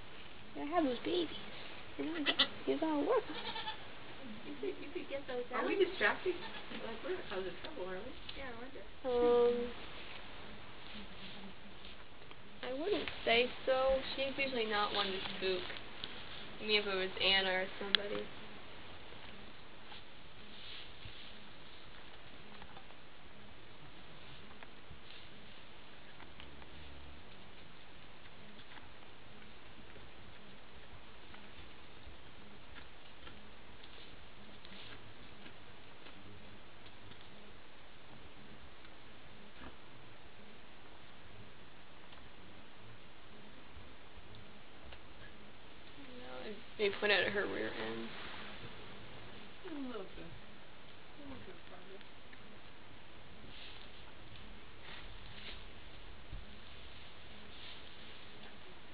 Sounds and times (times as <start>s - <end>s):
Bleat: 2.2s - 2.6s, 3.3s - 3.9s, 6.3s - 6.8s.